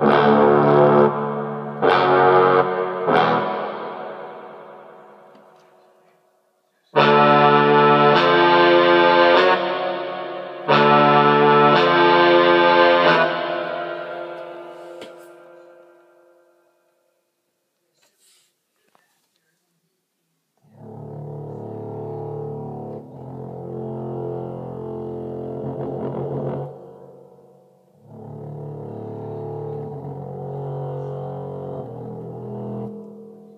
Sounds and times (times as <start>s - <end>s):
Music: 0.0s - 17.3s, 20.6s - 33.5s.